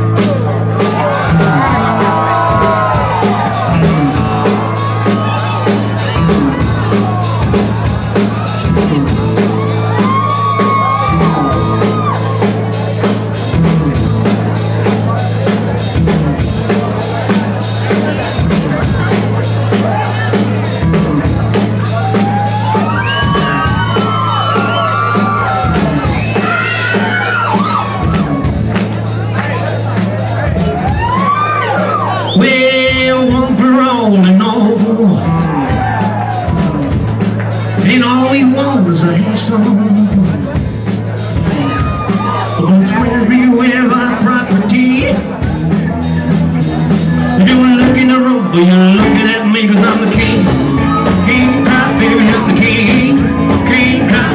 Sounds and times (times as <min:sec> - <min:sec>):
Music: 0:00.0 - 0:54.3
Speech: 0:29.1 - 0:30.8, 0:32.1 - 0:35.6, 0:37.5 - 0:41.7, 0:42.5 - 0:50.5.